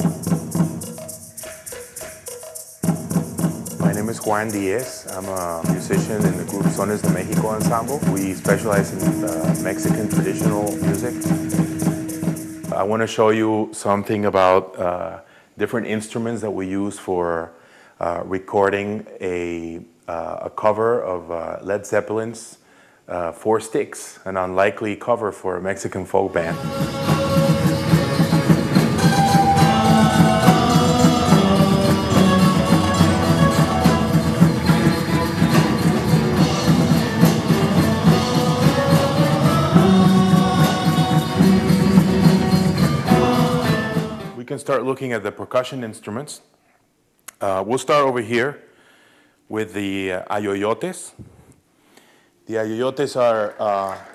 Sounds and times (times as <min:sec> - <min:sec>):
Percussion: 0:00.0 - 0:13.6, 0:26.4 - 0:44.5
Speech: 0:03.8 - 0:11.7, 0:12.7 - 0:26.6, 0:44.4 - 0:46.5, 0:47.3 - 0:48.7, 0:49.5 - 0:51.2, 0:52.5 - 0:54.1.